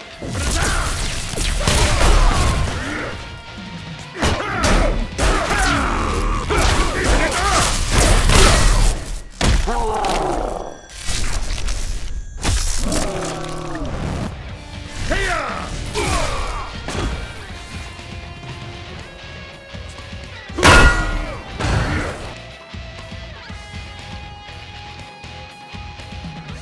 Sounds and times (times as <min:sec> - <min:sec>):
Music: 0:00.0 - 0:26.6.